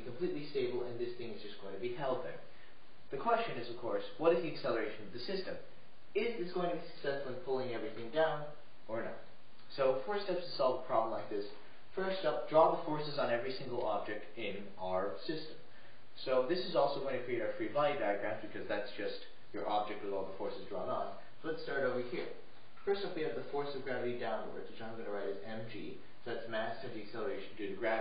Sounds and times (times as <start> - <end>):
Speech: 0.0 - 2.5, 3.1 - 28.0.